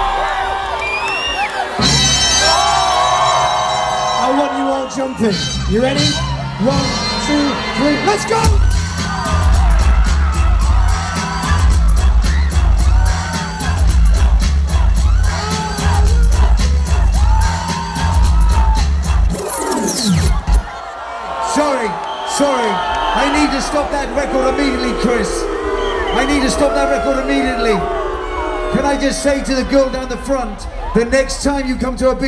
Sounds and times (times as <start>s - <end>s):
Speech: 4.2s - 8.6s, 21.4s - 25.4s, 26.1s - 27.8s, 28.8s - 32.2s.